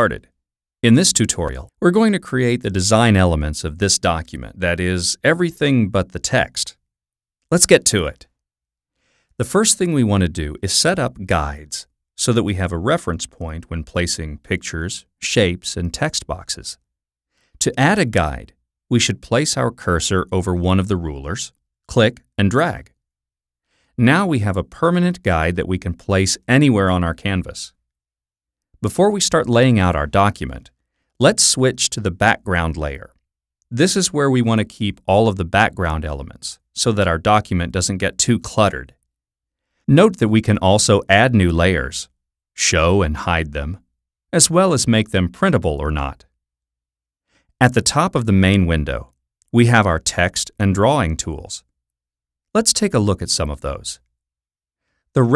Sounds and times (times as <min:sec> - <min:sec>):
Speech: 0:00.0 - 0:06.8, 0:07.5 - 0:08.4, 0:09.4 - 0:16.8, 0:17.6 - 0:23.0, 0:24.0 - 0:27.8, 0:28.8 - 0:39.0, 0:39.9 - 0:46.4, 0:47.6 - 0:51.7, 0:52.6 - 0:54.1.